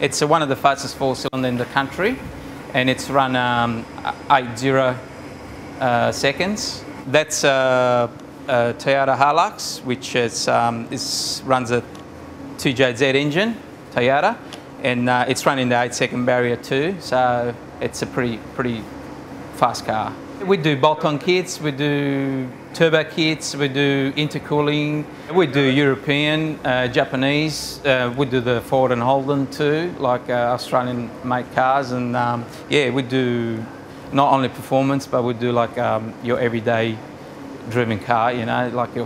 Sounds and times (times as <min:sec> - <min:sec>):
Speech: 0:00.0 - 0:05.0, 0:05.8 - 0:11.9, 0:12.6 - 0:18.9, 0:19.6 - 0:37.0, 0:37.7 - 0:39.0.